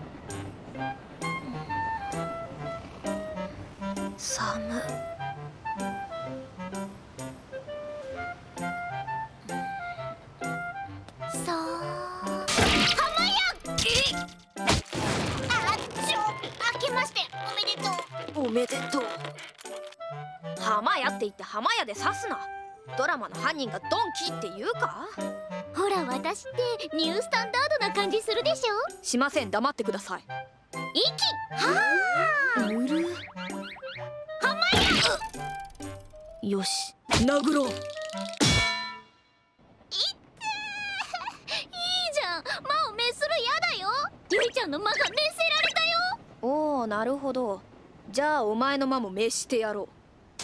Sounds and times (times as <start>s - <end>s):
Music: 0.0s - 39.7s
Speech: 20.6s - 25.2s, 25.8s - 30.2s.